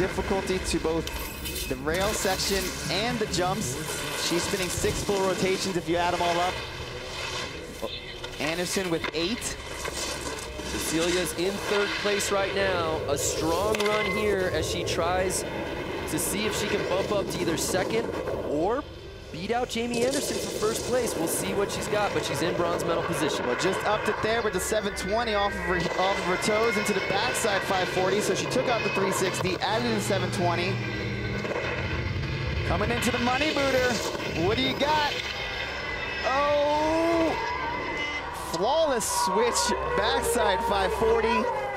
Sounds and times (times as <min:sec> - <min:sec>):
Speech: 0:00.0 - 0:01.1, 0:01.7 - 0:06.6, 0:08.4 - 0:09.6, 0:10.8 - 0:15.4, 0:16.1 - 0:18.8, 0:19.4 - 0:30.8, 0:32.7 - 0:35.2, 0:38.5 - 0:41.5.